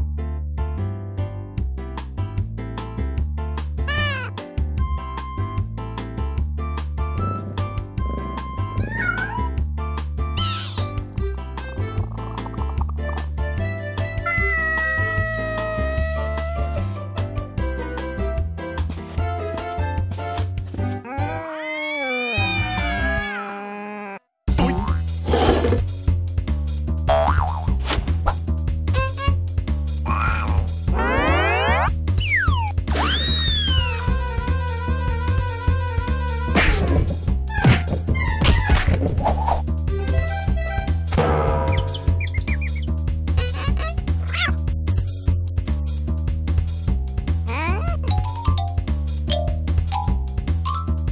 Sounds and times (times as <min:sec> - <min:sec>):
Music: 0:00.0 - 0:21.4, 0:22.3 - 0:23.3, 0:24.5 - 0:51.1
Meow: 0:03.9 - 0:04.3, 0:08.8 - 0:09.6, 0:14.2 - 0:16.8, 0:21.1 - 0:24.2, 0:43.8 - 0:44.6.